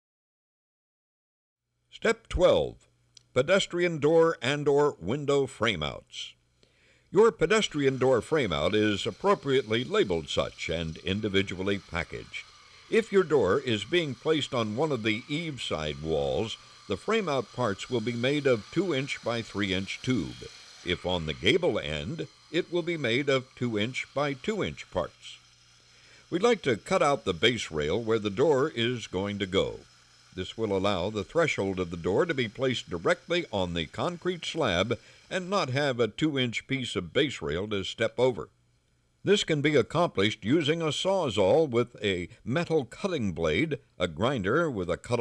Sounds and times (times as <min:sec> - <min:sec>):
Speech: 0:02.0 - 0:06.4, 0:07.1 - 0:25.4, 0:26.3 - 0:29.8, 0:30.4 - 0:38.5, 0:39.2 - 0:45.2.